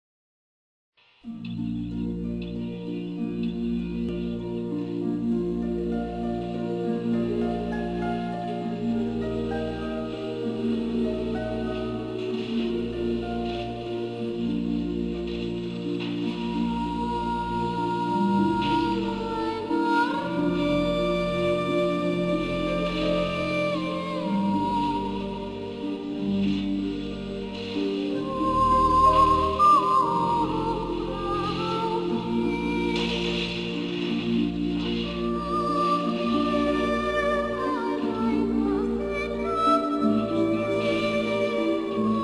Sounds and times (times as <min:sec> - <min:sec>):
Music: 0:01.0 - 0:42.2.